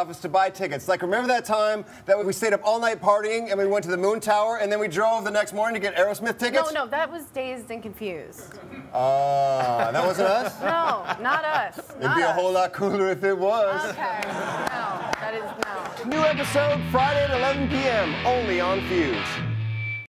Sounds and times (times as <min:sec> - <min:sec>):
Soundtrack music: 0:16.1 - 0:19.9.